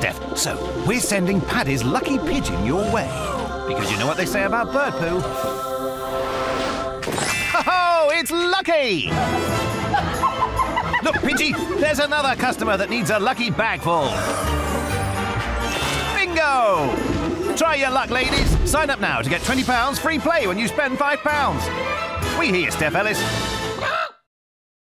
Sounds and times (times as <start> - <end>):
Speech: 0.0 - 3.1, 3.7 - 5.2, 7.7 - 9.1, 11.1 - 14.2, 16.2 - 17.0, 17.6 - 21.7, 22.4 - 23.2
Music: 0.0 - 24.2.